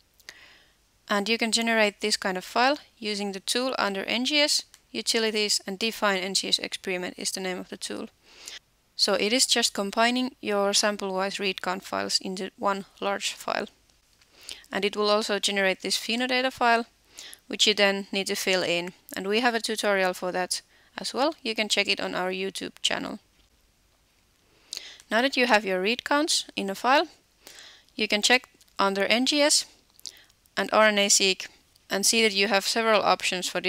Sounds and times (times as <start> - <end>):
Speech: 1.1 - 8.1, 9.0 - 13.7, 14.7 - 16.9, 17.5 - 23.2, 25.1 - 27.2, 28.0 - 29.7, 30.6 - 33.6.